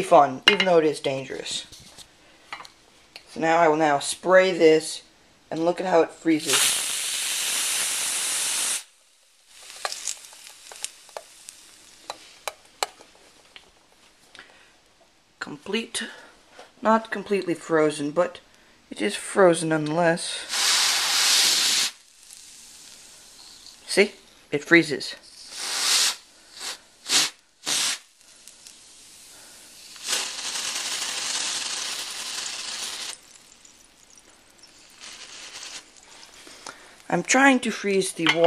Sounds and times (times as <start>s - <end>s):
Speech: 0.0s - 1.7s, 3.3s - 6.6s, 16.8s - 20.4s, 23.9s - 25.3s, 37.1s - 38.4s
Spray: 6.4s - 9.0s, 20.3s - 23.8s, 25.3s - 33.2s, 34.7s - 36.0s.